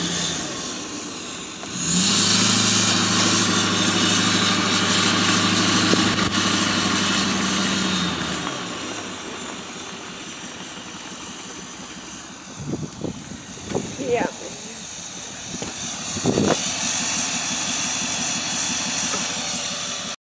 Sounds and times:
Vehicle: 0.0 - 20.2
Speech: 13.9 - 15.4.

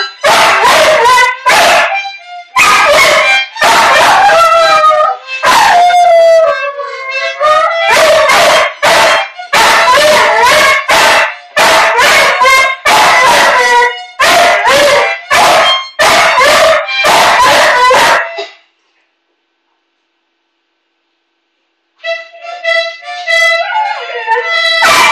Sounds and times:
Music: 0.0 - 18.7, 22.0 - 25.1.

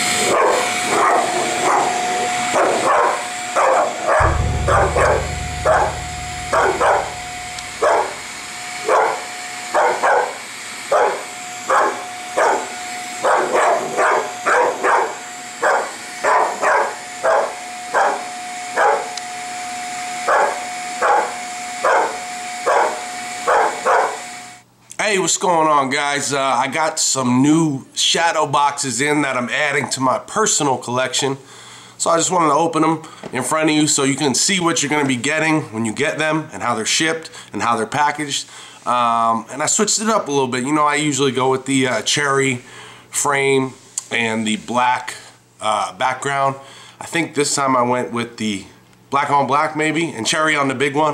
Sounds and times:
Bow-wow: 0.2 - 4.2, 9.8 - 18.2, 18.8 - 19.1, 20.3 - 24.2
Yip: 0.3 - 2.0, 2.6 - 4.2, 9.8 - 10.3, 10.9 - 18.2, 18.8 - 19.1, 20.3 - 24.2
Speech: 24.9 - 51.1.

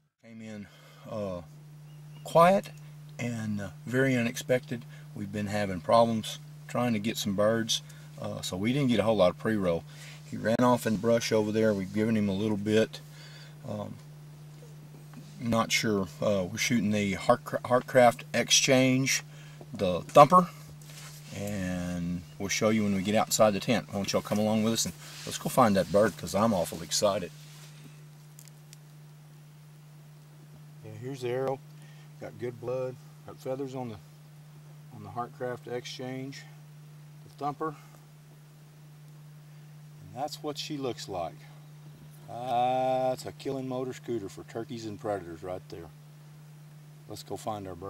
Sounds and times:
Speech: 0.2 - 1.5, 2.2 - 13.0, 13.6 - 14.0, 15.4 - 20.6, 21.3 - 27.4, 30.8 - 31.6, 32.2 - 34.0, 34.9 - 36.6, 37.3 - 37.9, 40.0 - 41.6, 42.3 - 46.0, 47.1 - 47.9.

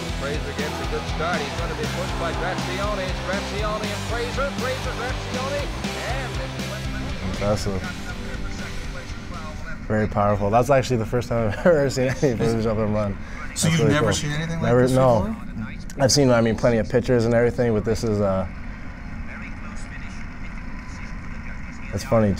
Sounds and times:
Music: 0.0 - 10.3
Speech: 0.0 - 18.5, 19.3 - 22.3.

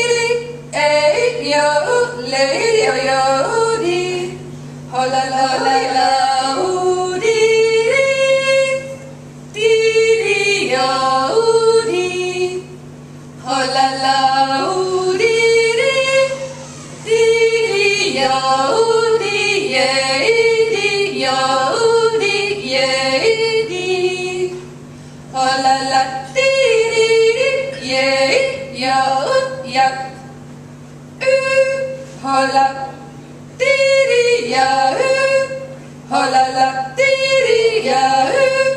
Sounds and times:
Female singing: 0.0 - 9.0, 9.6 - 12.7, 13.4 - 24.7, 25.4 - 30.2, 31.2 - 33.0, 33.6 - 38.7.

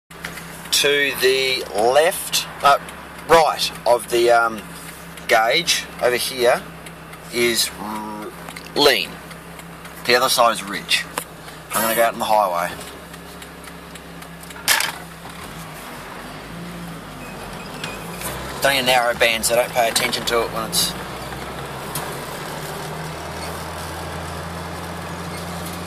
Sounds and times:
Car: 0.1 - 25.8
Speech: 0.7 - 4.7, 5.3 - 6.7, 7.3 - 9.2, 10.0 - 12.8, 18.6 - 21.0.

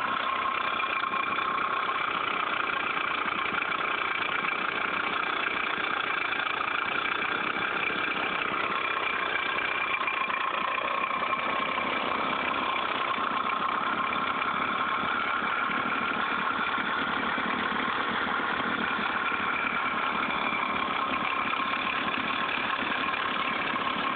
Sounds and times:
Vehicle: 0.0 - 24.1.

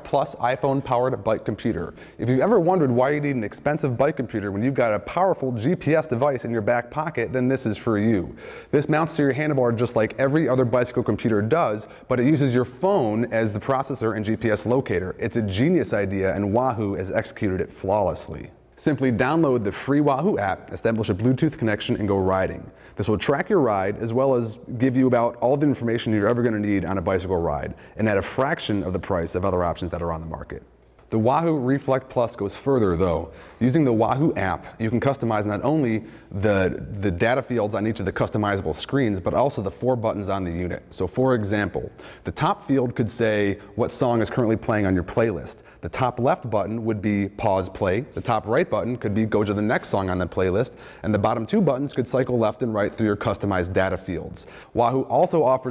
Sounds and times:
Speech: 0.0 - 55.7.

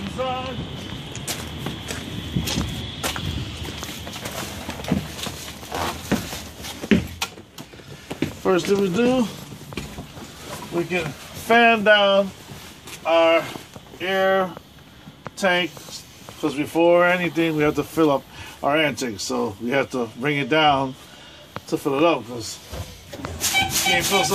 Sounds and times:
Speech: 0.0 - 0.6, 8.4 - 9.4, 10.7 - 12.4, 13.0 - 14.6, 15.4 - 21.0, 21.6 - 22.7, 23.7 - 24.3.

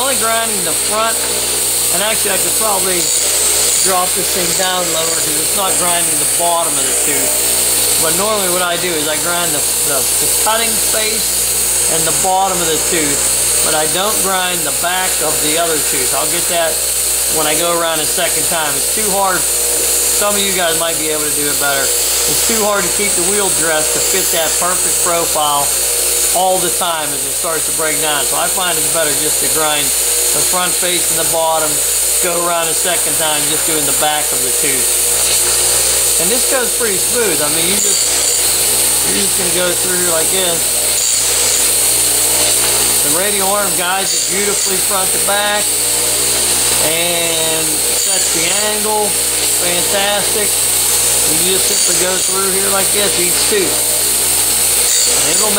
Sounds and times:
Speech: 0.0 - 7.4, 8.0 - 35.0, 36.2 - 41.3, 43.0 - 45.8, 46.8 - 50.6, 51.2 - 54.0, 54.9 - 55.5.

